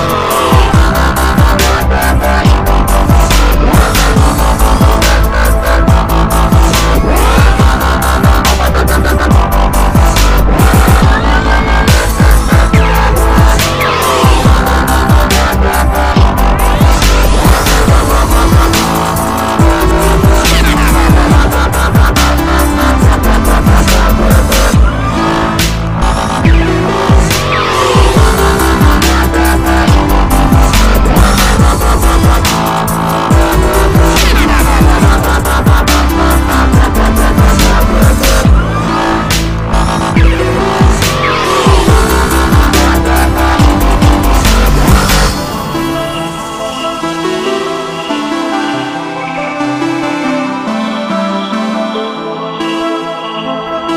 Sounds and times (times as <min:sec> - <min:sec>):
Music: 0:00.0 - 0:53.9.